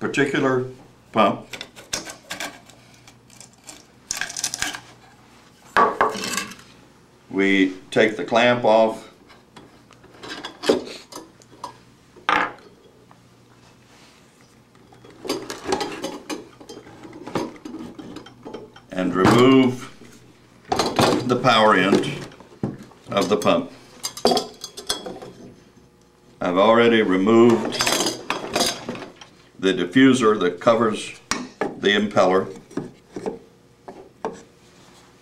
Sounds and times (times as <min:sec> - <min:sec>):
Speech: 0:00.0 - 0:01.5, 0:07.3 - 0:09.2, 0:18.9 - 0:19.9, 0:21.1 - 0:22.3, 0:23.1 - 0:23.7, 0:26.4 - 0:27.8, 0:29.6 - 0:32.6.